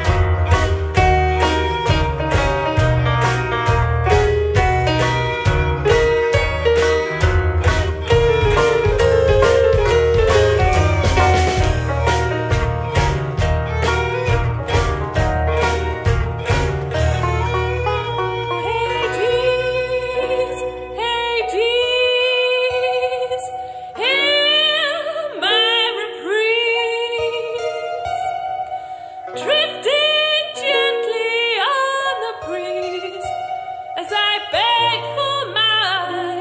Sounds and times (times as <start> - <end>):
Steel guitar, slide guitar: 0.0 - 23.6.